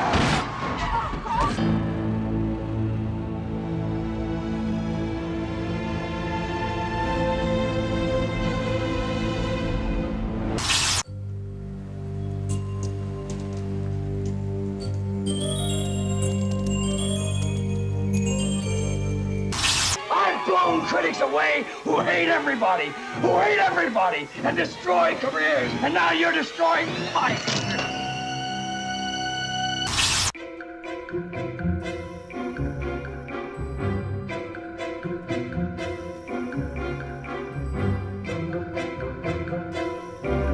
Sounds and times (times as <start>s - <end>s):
Music: 1.4s - 40.5s.